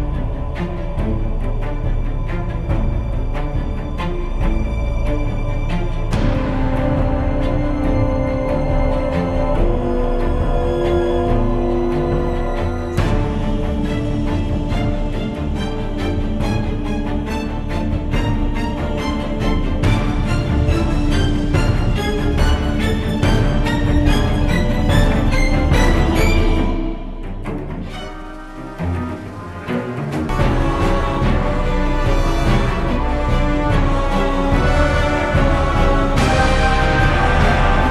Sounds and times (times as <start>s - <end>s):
Scary music: 0.0s - 37.9s.